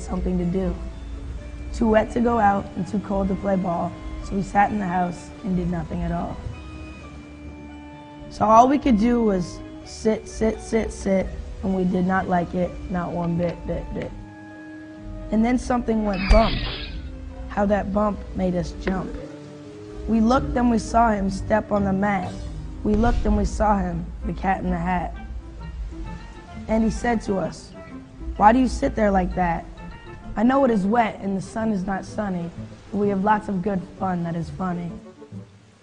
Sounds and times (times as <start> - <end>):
Speech: 0.0 - 0.8, 1.8 - 6.4, 8.3 - 14.2, 15.3 - 16.9, 17.5 - 19.4, 20.1 - 25.2, 26.7 - 27.7, 28.4 - 29.7, 30.4 - 35.0
Music: 0.0 - 35.8.